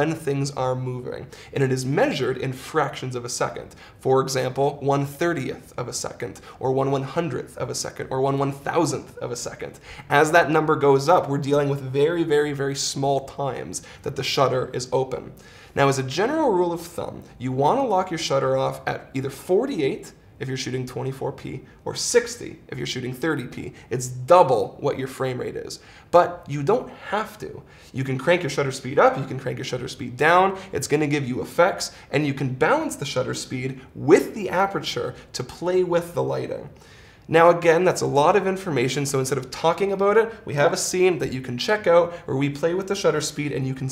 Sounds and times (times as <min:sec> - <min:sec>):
Speech: 0:00.0 - 0:43.9.